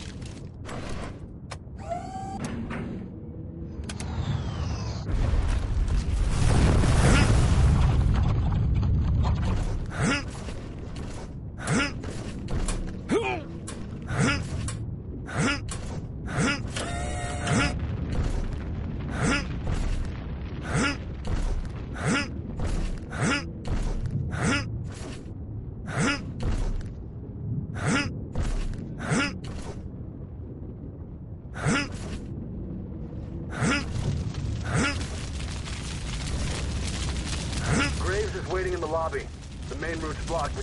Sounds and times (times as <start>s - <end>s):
Speech: 37.7s - 40.6s.